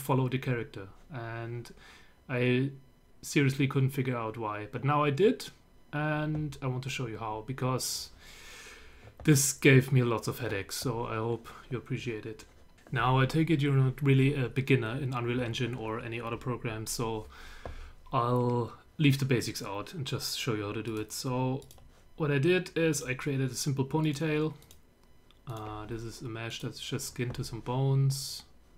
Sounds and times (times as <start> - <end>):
Speech: 0.0 - 8.2, 9.2 - 17.3, 18.1 - 24.6, 25.5 - 28.6.